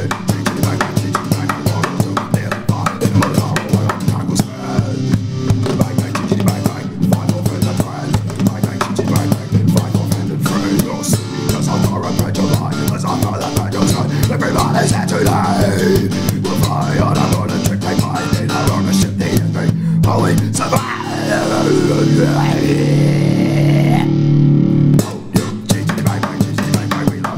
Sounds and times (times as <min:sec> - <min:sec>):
Music: 0:00.0 - 0:27.3.